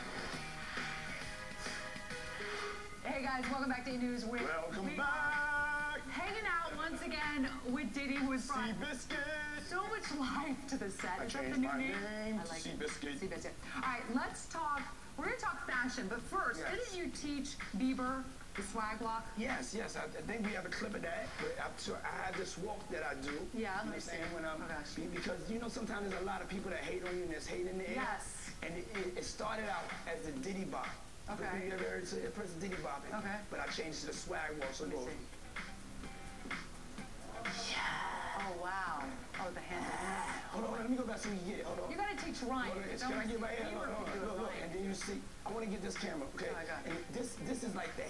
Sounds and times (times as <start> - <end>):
Music: 0.0 - 48.1.